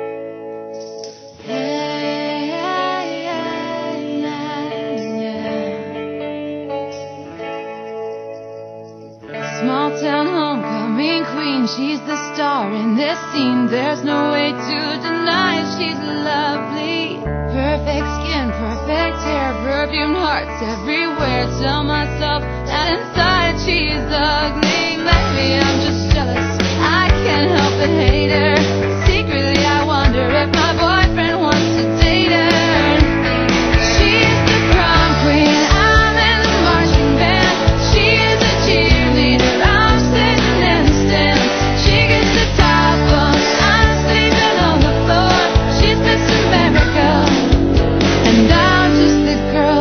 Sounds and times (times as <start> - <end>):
Music: 0.0 - 49.8.